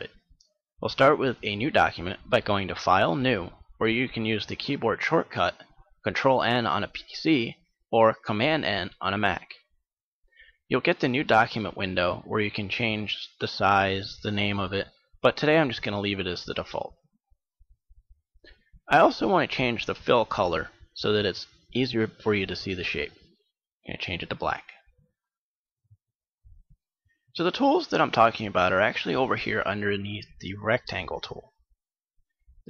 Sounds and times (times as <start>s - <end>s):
Speech: 0.0s - 0.2s, 0.8s - 9.7s, 10.7s - 17.0s, 18.9s - 24.9s, 27.3s - 31.6s.